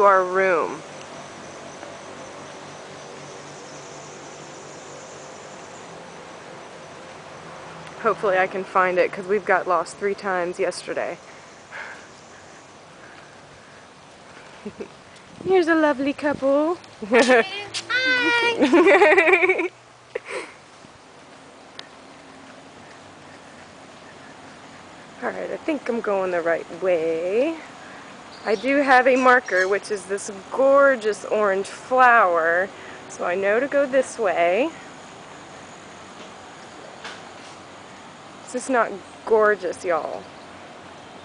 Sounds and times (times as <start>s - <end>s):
Speech: 25.2s - 27.6s, 28.5s - 34.8s.